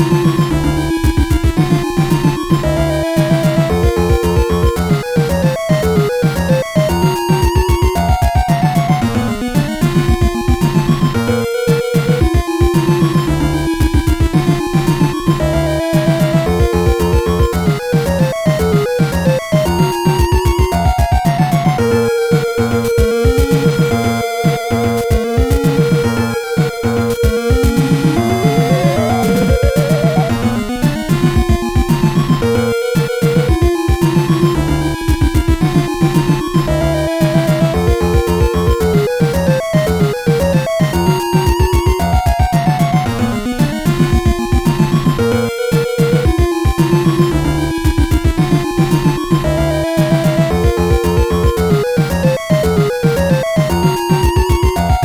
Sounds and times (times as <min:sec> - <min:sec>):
Video game music: 0:00.0 - 0:55.0.